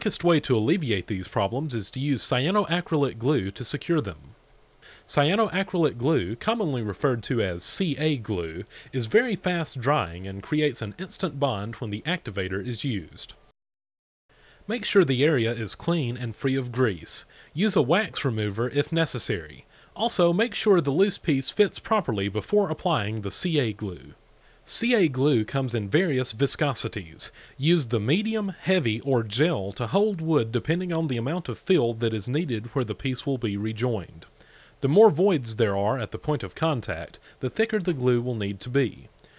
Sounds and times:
Speech: 0:00.0 - 0:04.4, 0:05.1 - 0:13.4, 0:14.7 - 0:39.2.

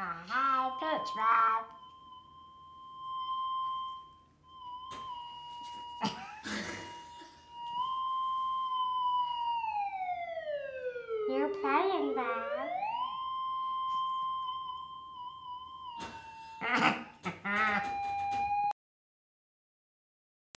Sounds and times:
Speech: 0:00.0 - 0:01.7, 0:11.3 - 0:12.7.

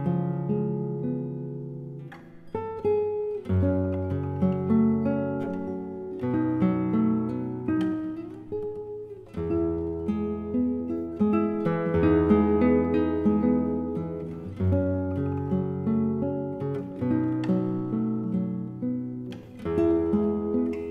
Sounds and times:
Acoustic guitar: 0:00.0 - 0:20.9.

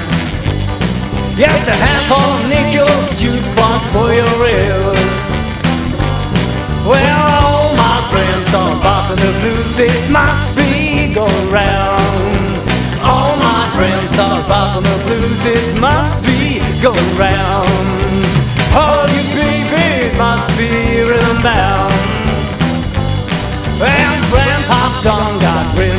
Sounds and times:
Blues: 0:00.0 - 0:25.9.

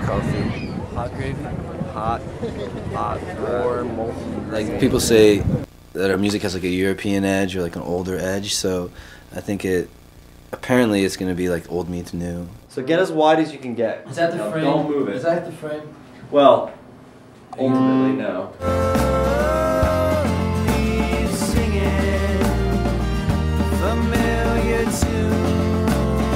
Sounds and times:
Speech: 0:00.0 - 0:09.9, 0:10.6 - 0:16.8.

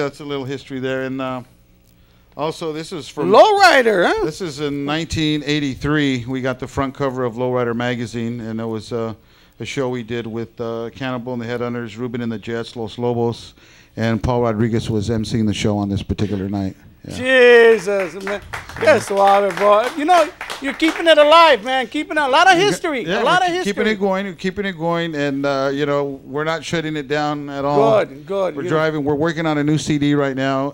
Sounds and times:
Speech: 0:02.4 - 0:30.7.

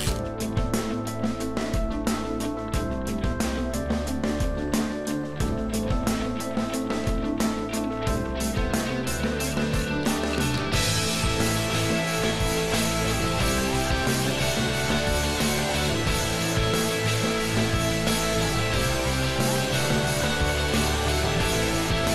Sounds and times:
Music: 0:00.0 - 0:22.1.

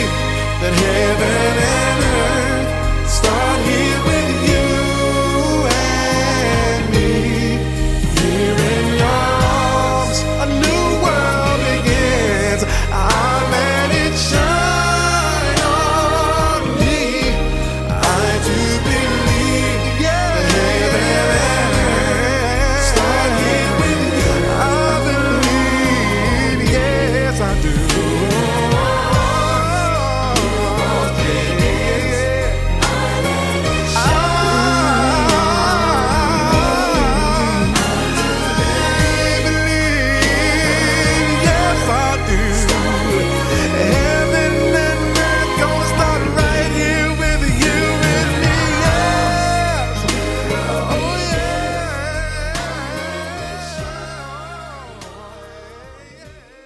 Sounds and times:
Christian music: 0:00.0 - 0:56.6.

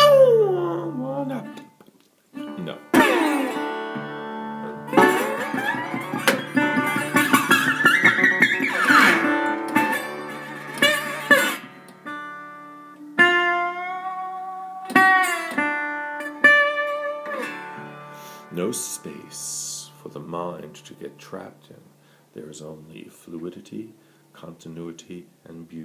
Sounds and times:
Blues: 0:00.0 - 0:21.6
Acoustic guitar: 0:00.0 - 0:24.5.

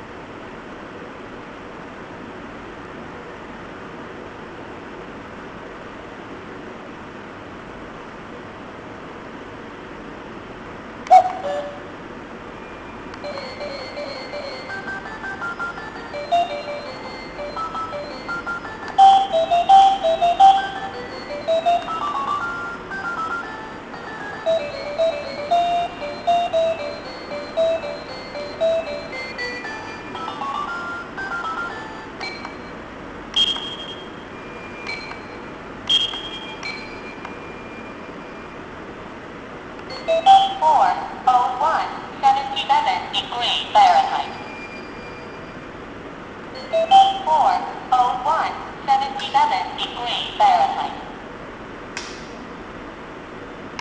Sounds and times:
Music: 0:13.3 - 0:32.6.

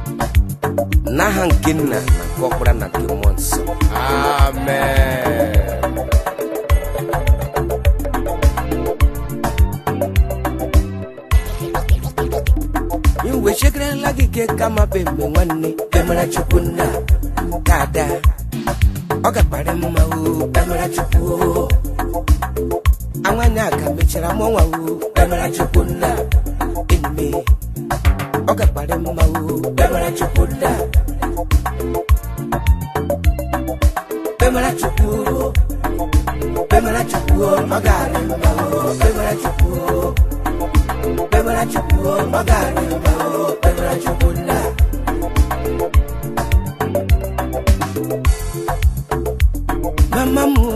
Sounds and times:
Music of Africa: 0:00.0 - 0:50.7.

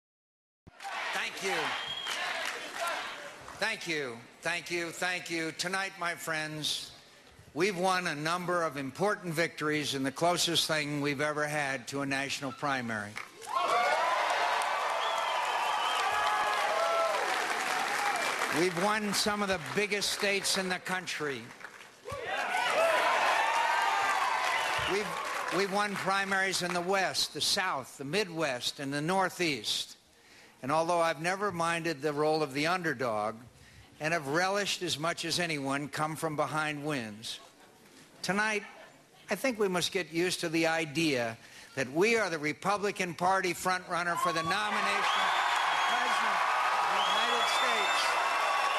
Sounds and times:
Male speech, man speaking: 0:01.1 - 0:01.8, 0:03.6 - 0:06.9, 0:07.6 - 0:13.1, 0:18.6 - 0:21.5, 0:24.9 - 0:30.0, 0:30.6 - 0:33.4, 0:34.0 - 0:37.5, 0:38.2 - 0:45.2
Narration, monologue: 0:03.2 - 0:13.6, 0:18.4 - 0:22.1, 0:24.8 - 0:45.3.

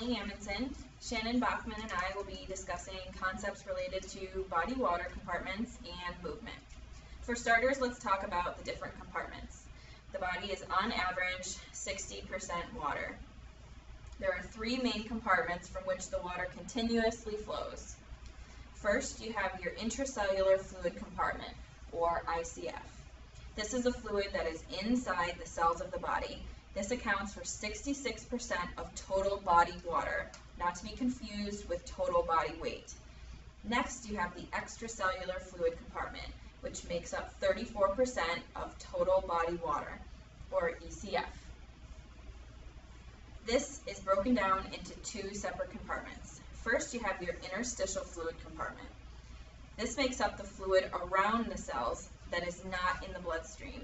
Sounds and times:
Speech: 0:00.0 - 0:06.7, 0:07.3 - 0:09.6, 0:10.2 - 0:13.2, 0:14.2 - 0:18.0, 0:18.8 - 0:23.0, 0:23.6 - 0:33.0, 0:33.7 - 0:41.4, 0:43.5 - 0:49.0, 0:49.8 - 0:53.8.

